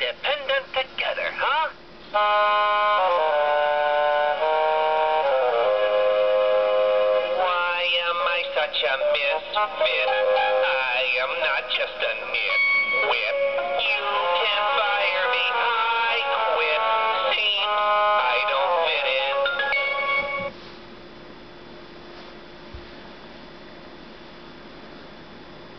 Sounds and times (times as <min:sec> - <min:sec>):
Music: 0:02.2 - 0:20.6.